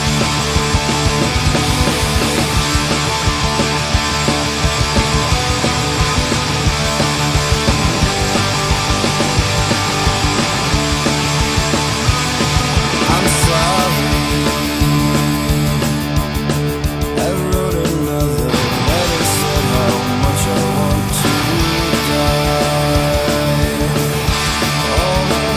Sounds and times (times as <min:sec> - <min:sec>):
Guitar: 0:00.0 - 0:25.5
Heavy metal: 0:00.0 - 0:25.5.